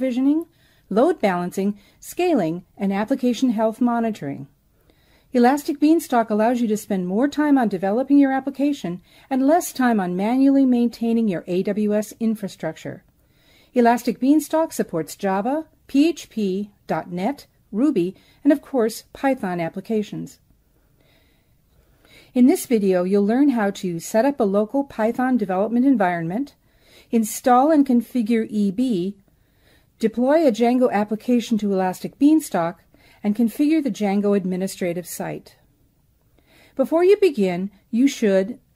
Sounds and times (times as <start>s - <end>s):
Speech: 0.0s - 4.5s, 5.4s - 13.0s, 13.8s - 20.4s, 22.4s - 26.6s, 27.2s - 29.2s, 30.0s - 35.6s, 36.8s - 38.6s.